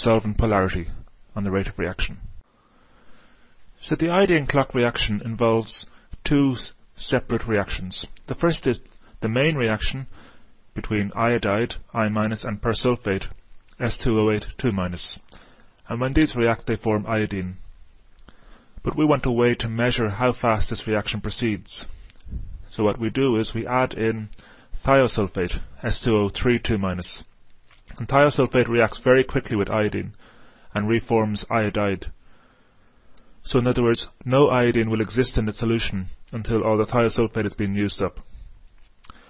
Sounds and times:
Speech: 0:00.0 - 0:02.3, 0:03.8 - 0:10.1, 0:10.8 - 0:17.6, 0:18.8 - 0:22.0, 0:22.7 - 0:32.2, 0:33.4 - 0:38.3.

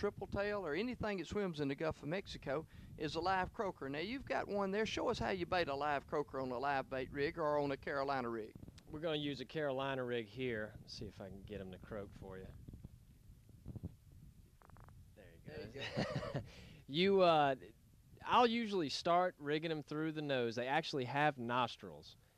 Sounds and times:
Speech: 0:00.0 - 0:12.5, 0:15.2 - 0:16.0, 0:16.9 - 0:22.2.

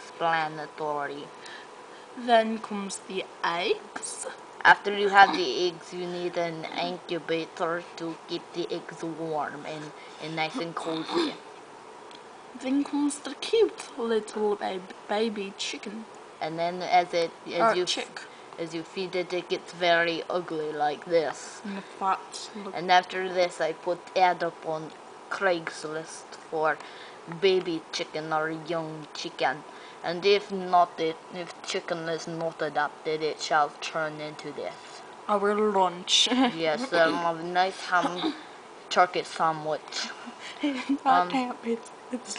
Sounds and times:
Speech: 0:00.0 - 0:01.6, 0:02.2 - 0:11.4, 0:12.6 - 0:42.3.

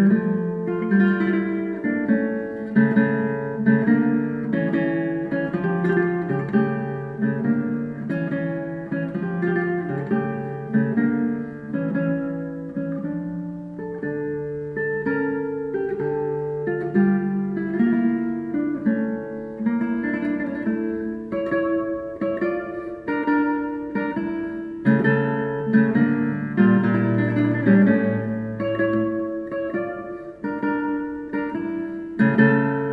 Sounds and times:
Acoustic guitar: 0:00.0 - 0:32.9
Strum: 0:00.0 - 0:32.9.

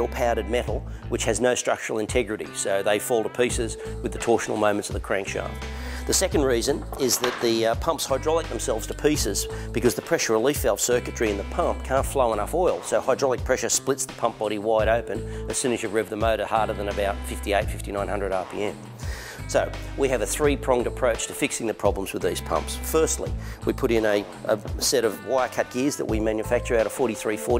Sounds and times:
Speech: 0:00.0 - 0:18.8, 0:19.5 - 0:27.5
Music: 0:00.0 - 0:27.5.

